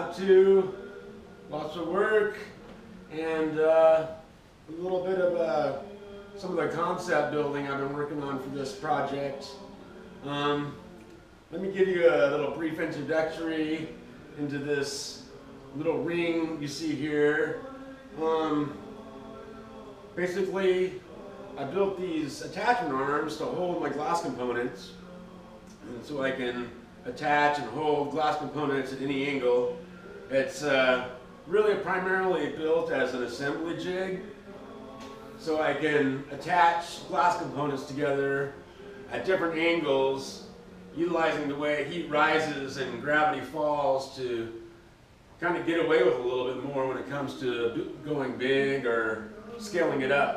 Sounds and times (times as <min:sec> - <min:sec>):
Speech: 0:00.0 - 0:10.8, 0:11.5 - 0:18.8, 0:20.2 - 0:25.0, 0:25.8 - 0:34.3, 0:35.4 - 0:44.6, 0:45.4 - 0:50.3.